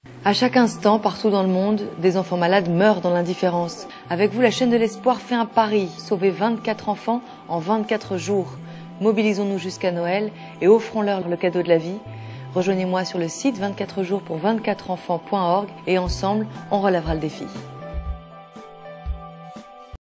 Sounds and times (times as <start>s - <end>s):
Music: 0.0s - 20.0s
Speech: 0.2s - 12.0s, 12.6s - 17.7s.